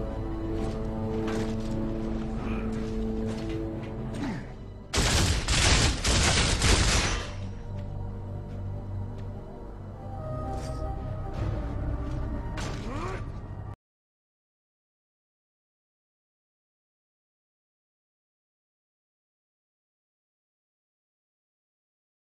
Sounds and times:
Music: 0:00.0 - 0:13.8.

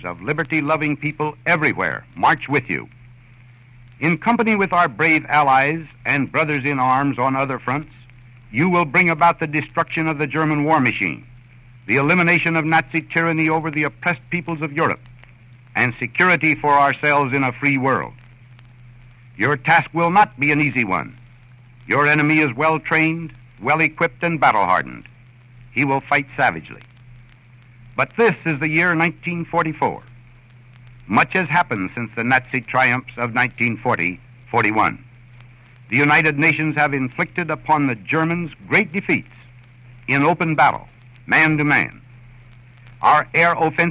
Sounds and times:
Male speech, man speaking: 0:00.0 - 0:02.9, 0:04.0 - 0:08.0, 0:08.6 - 0:11.3, 0:11.9 - 0:15.0, 0:15.8 - 0:18.2, 0:19.4 - 0:21.2, 0:21.9 - 0:25.1, 0:25.8 - 0:26.8, 0:28.0 - 0:30.1, 0:31.1 - 0:35.0, 0:35.9 - 0:39.5, 0:40.1 - 0:42.0, 0:43.0 - 0:43.9
Narration, monologue: 0:00.0 - 0:43.9.

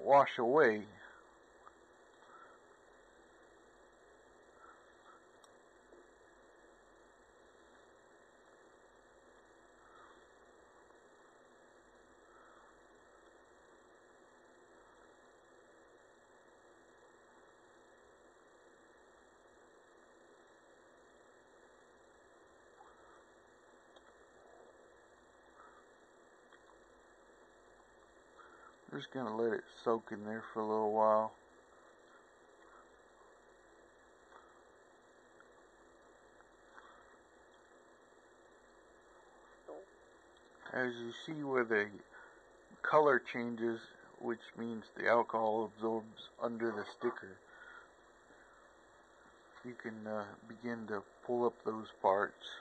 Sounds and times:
Speech: 0:00.0 - 0:01.2, 0:28.9 - 0:31.4, 0:40.6 - 0:42.1, 0:42.8 - 0:47.4, 0:49.6 - 0:52.6
Silence: 0:00.0 - 0:52.6.

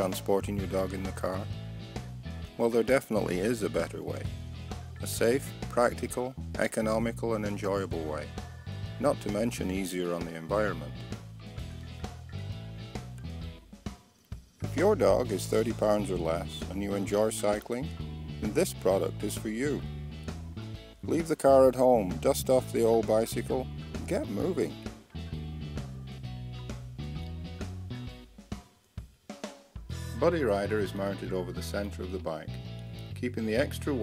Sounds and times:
Speech: 0:00.0 - 0:01.5, 0:02.6 - 0:04.3, 0:05.0 - 0:08.3, 0:09.0 - 0:11.0, 0:14.6 - 0:19.9, 0:21.0 - 0:24.9, 0:30.1 - 0:34.0
Music: 0:00.0 - 0:34.0.

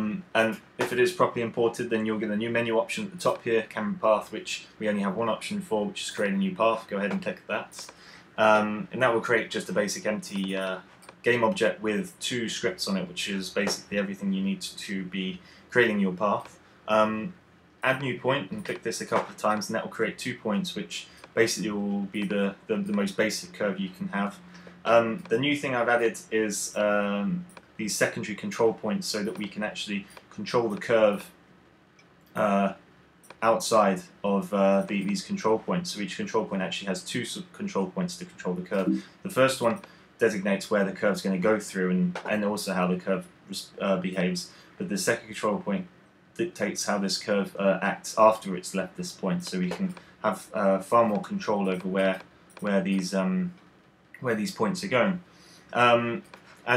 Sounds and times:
Speech: 0:00.0 - 0:31.4, 0:32.4 - 0:32.8, 0:33.4 - 0:53.6, 0:54.2 - 0:56.7.

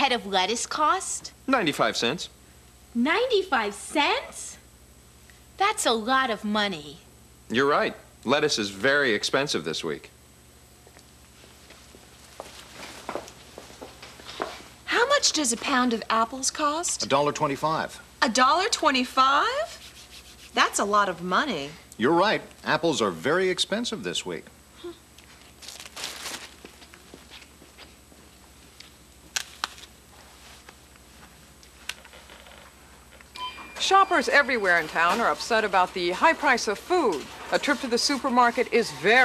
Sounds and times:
Speech: 0:33.8 - 0:39.2.

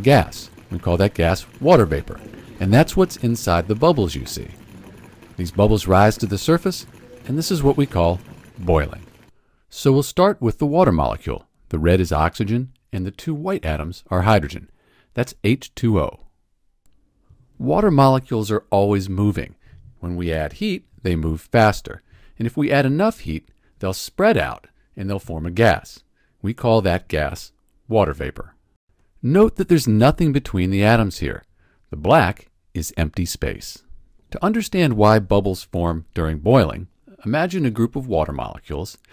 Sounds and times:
Speech: 0:00.0 - 0:04.6, 0:05.4 - 0:09.1, 0:09.7 - 0:16.3, 0:17.6 - 0:28.6, 0:29.2 - 0:39.1.

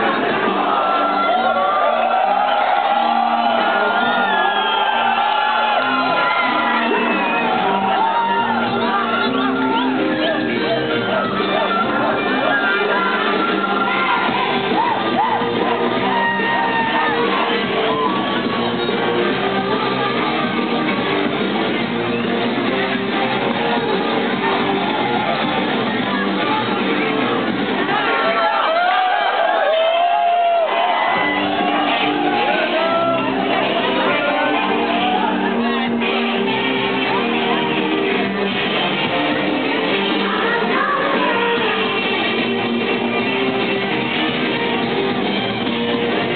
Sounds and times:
Music: 0:00.0 - 0:46.3.

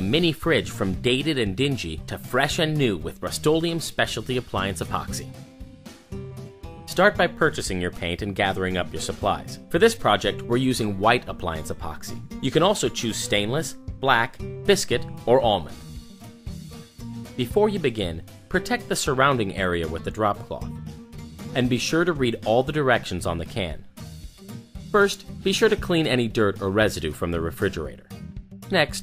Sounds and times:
Speech: 0:00.0 - 0:05.3, 0:06.9 - 0:15.8, 0:17.4 - 0:20.7, 0:21.5 - 0:23.9, 0:24.9 - 0:28.0, 0:28.7 - 0:29.0
Music: 0:00.0 - 0:29.0.

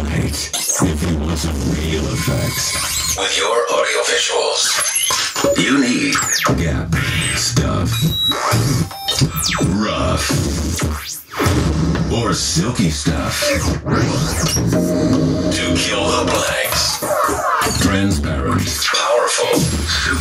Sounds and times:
Speech: 0:00.0 - 0:08.1, 0:09.2 - 0:10.4, 0:12.0 - 0:13.8, 0:15.5 - 0:20.2
Music: 0:06.4 - 0:09.6, 0:13.8 - 0:18.0.

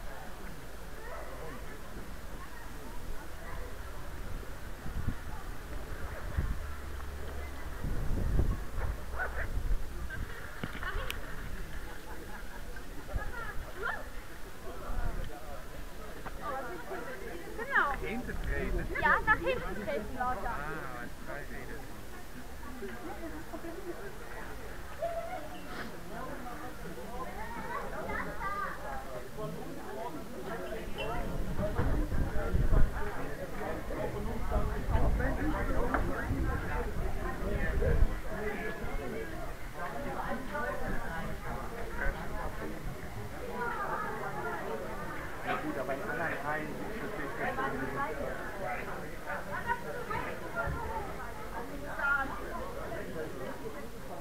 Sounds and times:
Speech: 0:00.0 - 0:04.5, 0:11.8 - 0:54.2.

